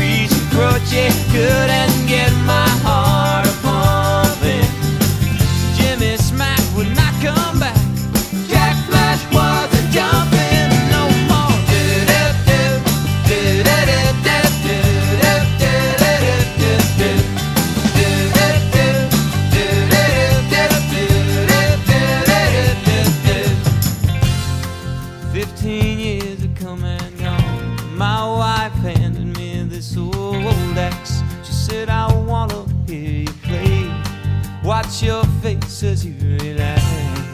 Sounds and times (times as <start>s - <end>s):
Grunge: 0.0s - 37.3s.